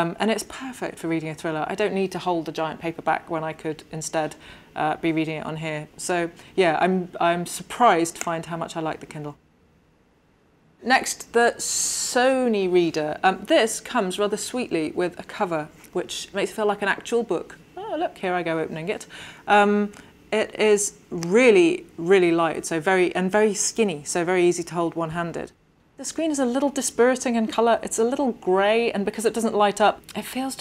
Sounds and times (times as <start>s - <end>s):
Speech: 0.0s - 9.4s, 10.8s - 30.6s.